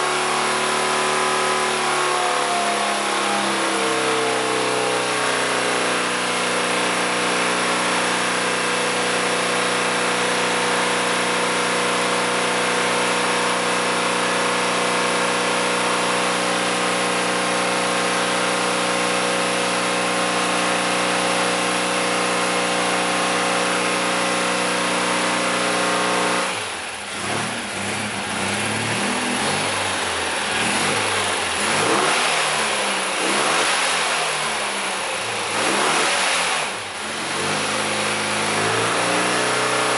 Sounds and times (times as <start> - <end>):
Medium engine (mid frequency): 0.0 - 39.9.